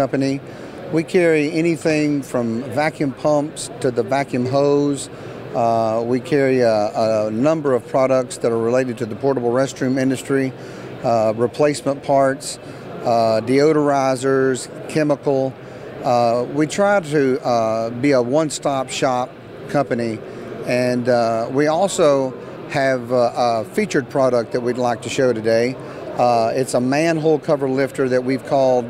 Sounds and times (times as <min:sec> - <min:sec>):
Speech: 0:00.0 - 0:28.8.